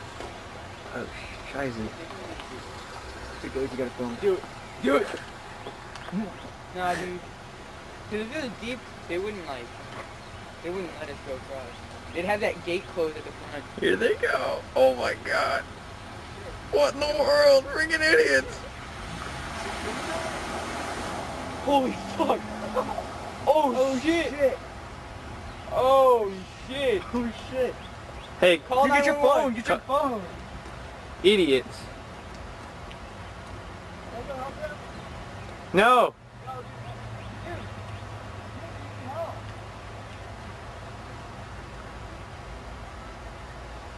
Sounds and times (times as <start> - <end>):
Stream: 0.0 - 43.9.